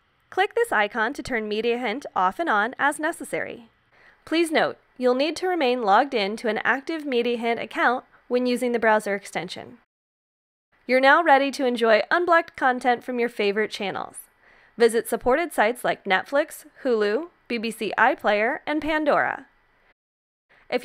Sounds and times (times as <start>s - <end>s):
Speech: 0.4s - 3.7s, 4.3s - 9.9s, 10.9s - 19.5s.